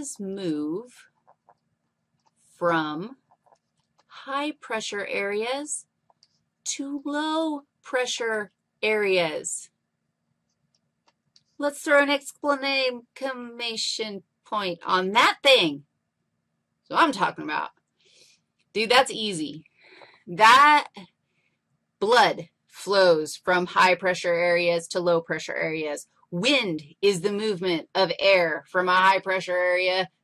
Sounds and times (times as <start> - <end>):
Speech: 0.0 - 1.0, 2.6 - 3.2, 4.2 - 5.8, 6.7 - 9.7, 11.6 - 15.8, 16.9 - 17.7, 18.8 - 19.6, 20.2 - 21.0, 22.0 - 30.2.